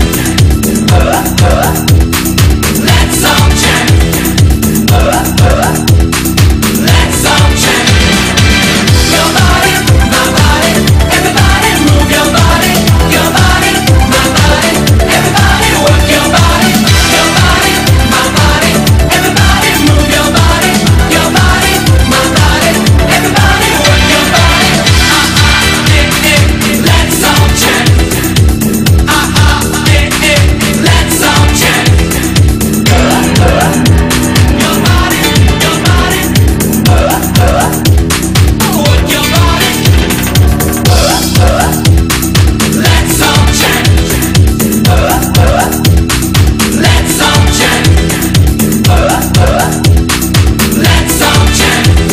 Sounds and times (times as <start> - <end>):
Music: 0.0 - 52.1.